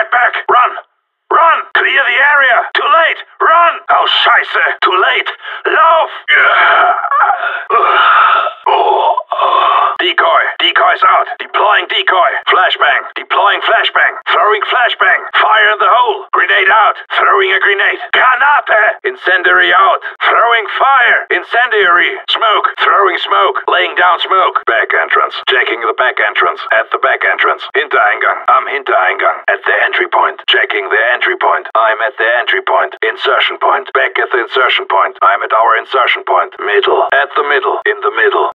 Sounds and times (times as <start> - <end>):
Speech: 0.0 - 38.5.